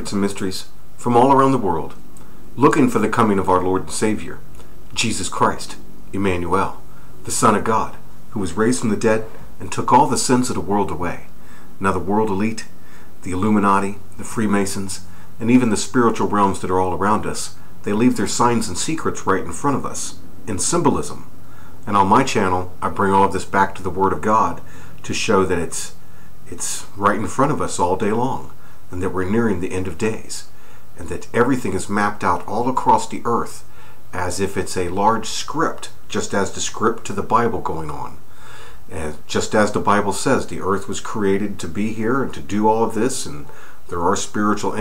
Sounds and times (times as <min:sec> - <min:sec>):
Speech: 0:00.0 - 0:02.0, 0:02.6 - 0:38.2, 0:38.9 - 0:44.8.